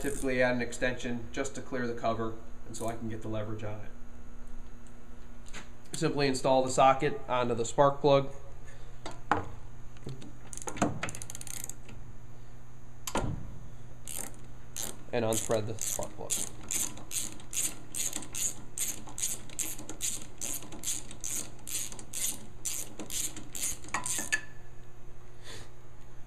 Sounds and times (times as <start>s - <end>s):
Speech: 0.0s - 4.0s, 6.0s - 8.3s, 15.1s - 16.4s.